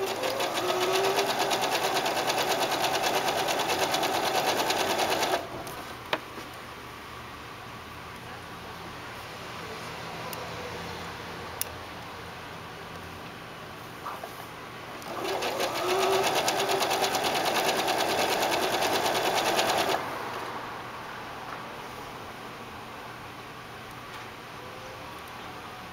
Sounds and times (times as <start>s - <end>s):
Sewing machine: 0.0s - 5.5s, 15.0s - 20.0s.